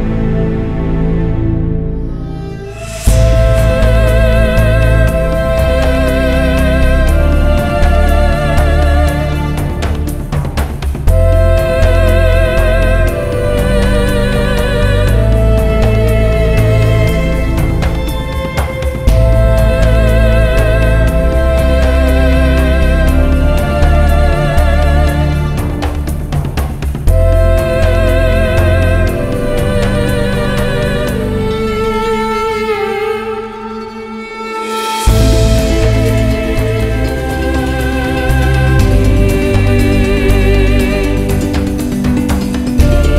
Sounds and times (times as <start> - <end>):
Music: 0.0 - 43.1.